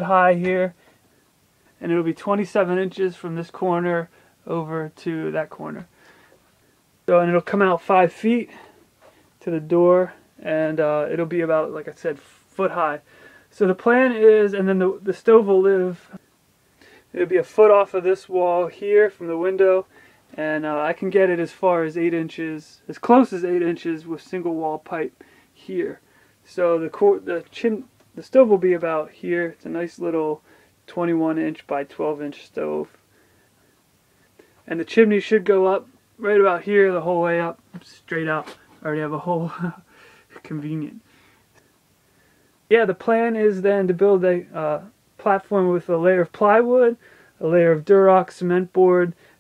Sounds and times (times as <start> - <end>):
Speech: 0.0 - 0.8, 1.8 - 5.9, 7.1 - 8.7, 9.4 - 16.2, 17.1 - 33.0, 34.6 - 41.1, 42.7 - 49.2.